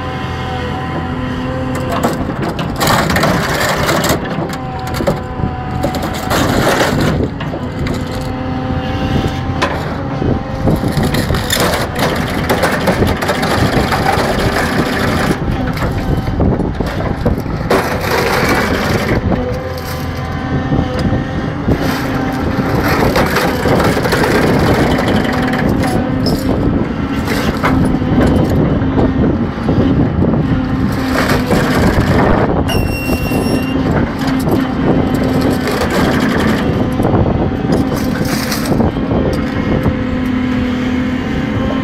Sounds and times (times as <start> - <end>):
Vehicle: 0.0 - 41.8.